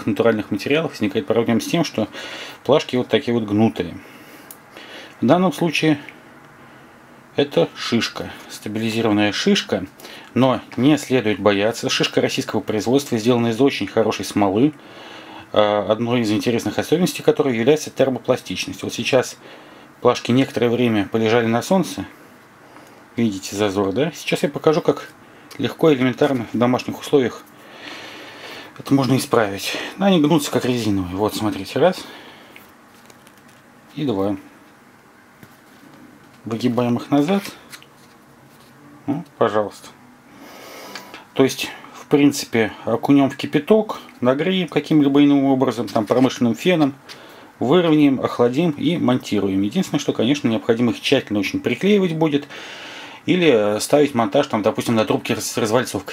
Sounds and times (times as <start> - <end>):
Speech: 0.0 - 4.0, 5.2 - 6.1, 7.4 - 14.8, 15.5 - 19.4, 20.0 - 22.2, 23.2 - 27.5, 28.8 - 32.1, 33.9 - 34.5, 36.4 - 37.6, 39.0 - 40.0, 41.4 - 47.0, 47.6 - 52.5, 53.2 - 56.1.